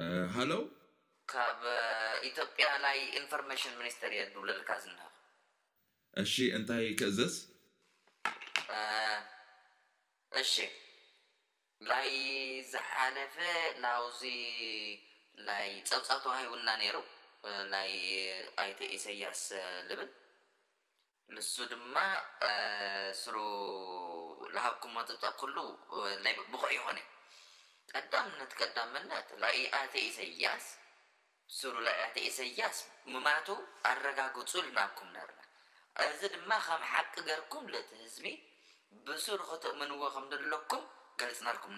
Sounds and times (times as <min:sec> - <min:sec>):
Speech: 0:00.0 - 0:00.6, 0:01.3 - 0:05.1, 0:06.2 - 0:07.4, 0:08.7 - 0:09.2, 0:10.4 - 0:10.7, 0:11.8 - 0:20.1, 0:21.3 - 0:27.0, 0:27.9 - 0:30.8, 0:31.5 - 0:35.4, 0:36.0 - 0:38.4, 0:39.0 - 0:41.7.